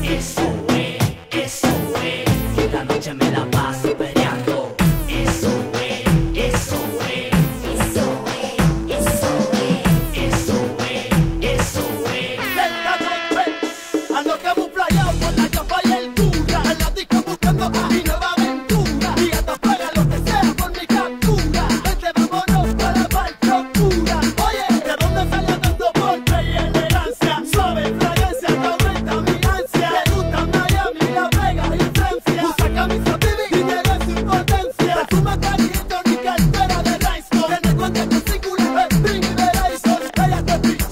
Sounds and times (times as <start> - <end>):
Singing: 0.0 - 40.9.